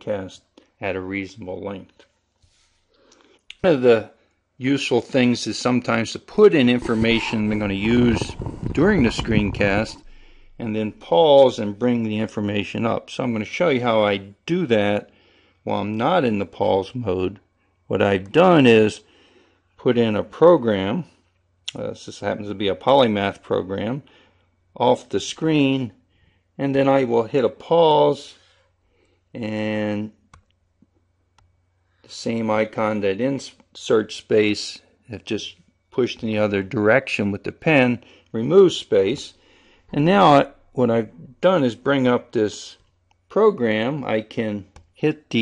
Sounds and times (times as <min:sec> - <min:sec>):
Speech: 0:00.0 - 0:02.1, 0:03.5 - 0:10.0, 0:10.6 - 0:19.1, 0:19.8 - 0:24.1, 0:24.8 - 0:26.0, 0:26.6 - 0:28.4, 0:29.4 - 0:30.2, 0:32.1 - 0:45.4
Inside, small room: 0:00.0 - 0:45.4.